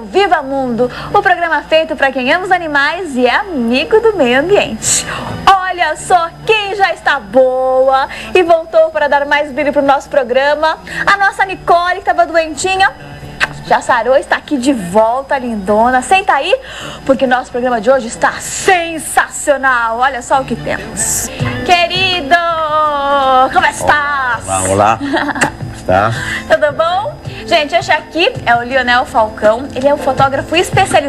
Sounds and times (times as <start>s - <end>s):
Music: 0.0s - 31.0s.